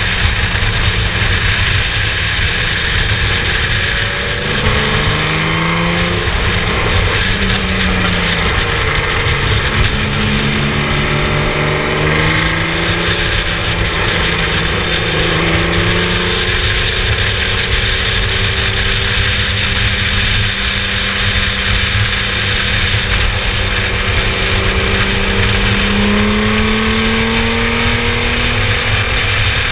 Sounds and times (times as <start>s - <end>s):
Race car, auto racing: 0.0s - 29.7s.